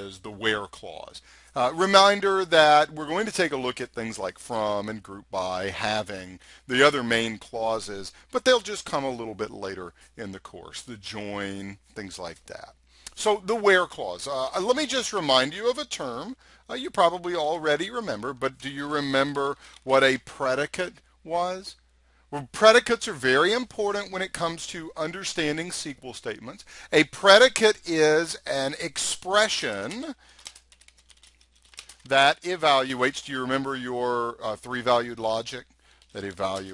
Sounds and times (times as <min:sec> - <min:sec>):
Speech: 0:00.0 - 0:30.2, 0:32.1 - 0:35.6, 0:36.2 - 0:36.7.